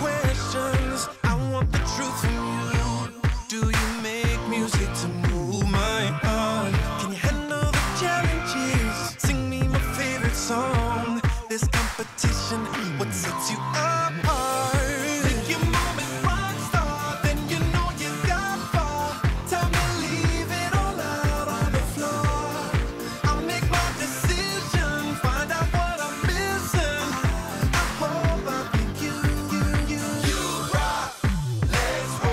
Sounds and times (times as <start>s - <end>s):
Punk rock: 0.0s - 32.3s
Rock and roll: 0.0s - 32.3s
Soul music: 0.0s - 32.3s
Progressive rock: 11.8s - 32.3s
Exciting music: 14.2s - 32.3s.